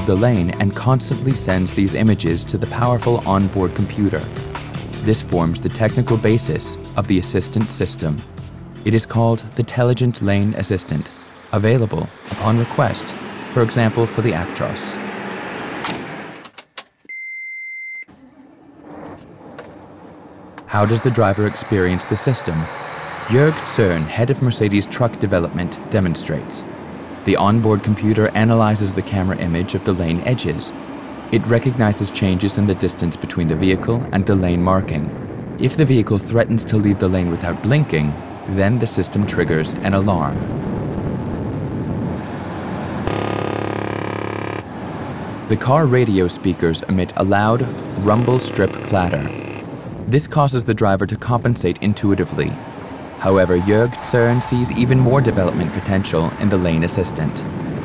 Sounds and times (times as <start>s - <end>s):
Speech: 0.0s - 4.3s, 5.0s - 8.3s, 8.9s - 15.0s, 20.7s - 22.7s, 23.3s - 26.6s, 27.3s - 30.7s, 31.4s - 40.5s, 45.5s - 49.3s, 50.1s - 52.6s, 53.2s - 57.5s
Truck: 8.2s - 16.4s, 18.1s - 34.4s, 42.0s - 50.0s.